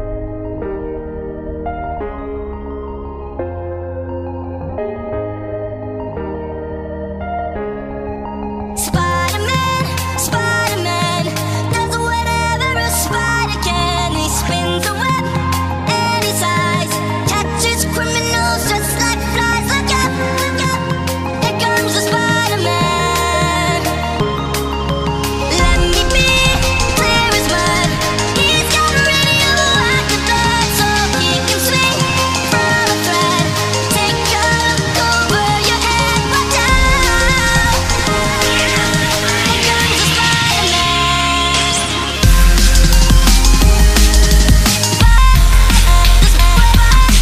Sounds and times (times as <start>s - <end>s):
Dubstep: 8.7s - 47.2s.